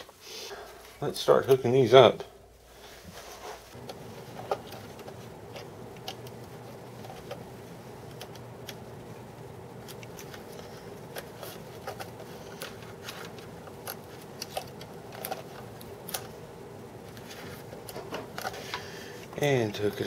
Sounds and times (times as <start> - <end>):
Inside, small room: 0.0 - 20.0
Speech: 1.0 - 2.4, 19.4 - 20.0.